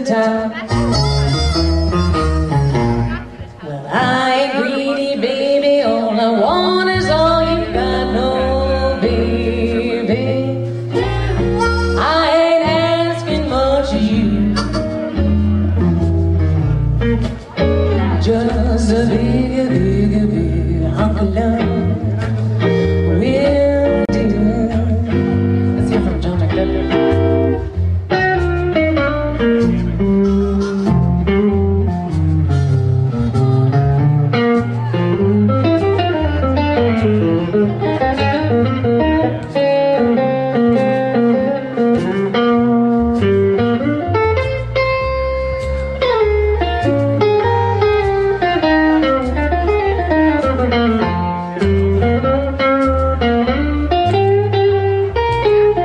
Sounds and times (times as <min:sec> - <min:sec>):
Music: 0:00.0 - 0:55.8
Speech: 0:03.0 - 0:10.7, 0:17.5 - 0:25.1, 0:25.7 - 0:27.3.